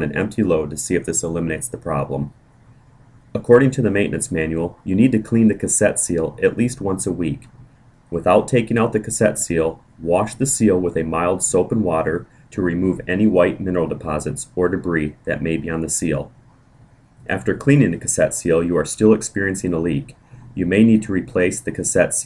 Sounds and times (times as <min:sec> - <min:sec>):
Speech: 0:00.0 - 0:02.3, 0:03.4 - 0:16.3, 0:17.3 - 0:22.2.